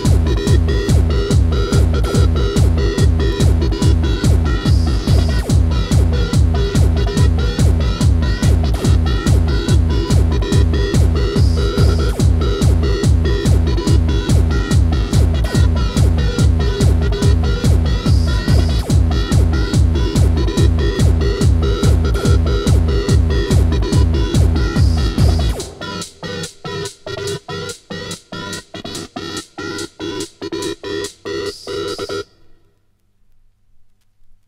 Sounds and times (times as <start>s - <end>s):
Techno: 0.0s - 32.3s.